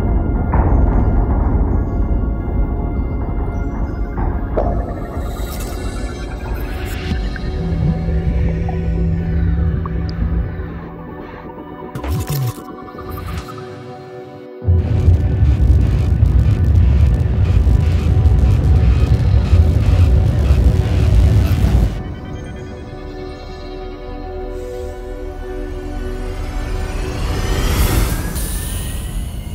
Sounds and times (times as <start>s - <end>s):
Music: 0.0s - 29.5s.